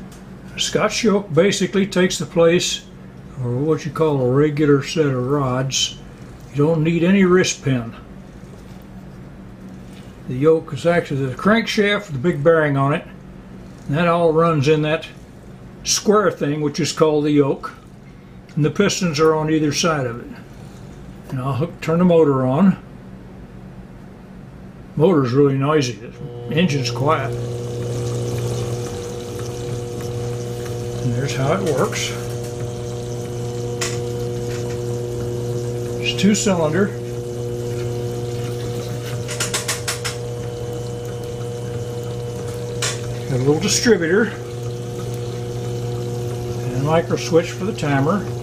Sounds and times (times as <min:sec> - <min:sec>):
Speech: 0:00.5 - 0:06.0, 0:06.6 - 0:08.1, 0:10.3 - 0:13.2, 0:13.9 - 0:15.2, 0:15.8 - 0:17.8, 0:18.6 - 0:20.4, 0:21.3 - 0:22.9, 0:25.0 - 0:27.4, 0:31.0 - 0:32.4, 0:36.0 - 0:37.0, 0:43.3 - 0:44.5, 0:46.6 - 0:48.3.